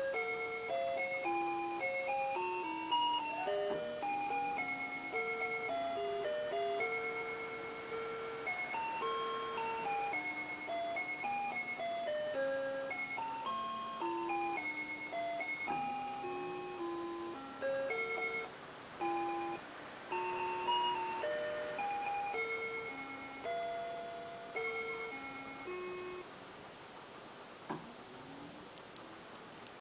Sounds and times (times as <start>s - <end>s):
Music: 0.0s - 26.3s.